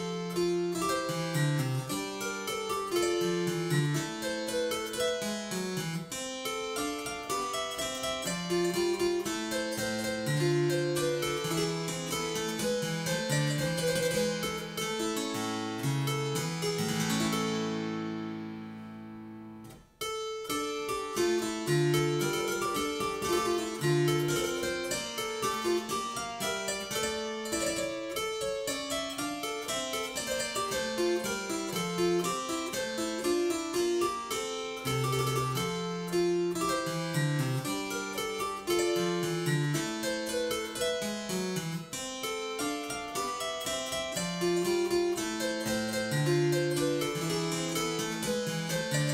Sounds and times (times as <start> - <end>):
Harpsichord: 0.0 - 49.1.